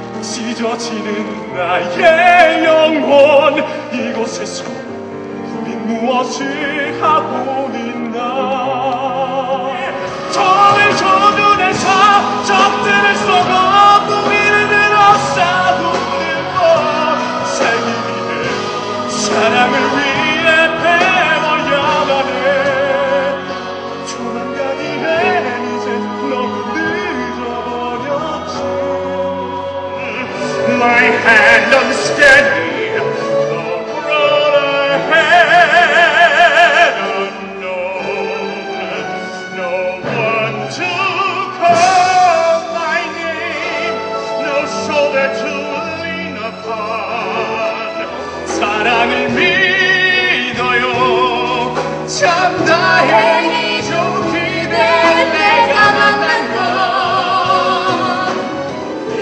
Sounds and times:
Music: 0.0 - 59.2.

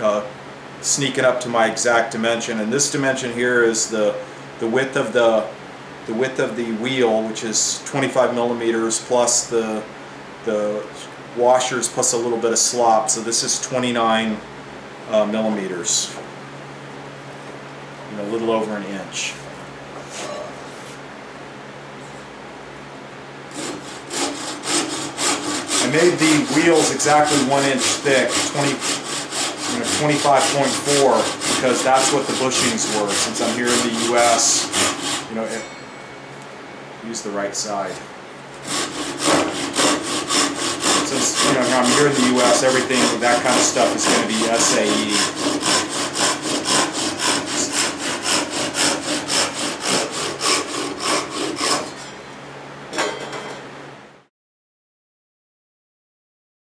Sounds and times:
Speech: 0.0 - 9.9, 10.5 - 14.4, 15.1 - 16.2, 18.1 - 19.4, 25.8 - 28.9, 29.7 - 35.7, 37.0 - 38.1, 41.0 - 45.4
Wood: 38.7 - 51.9.

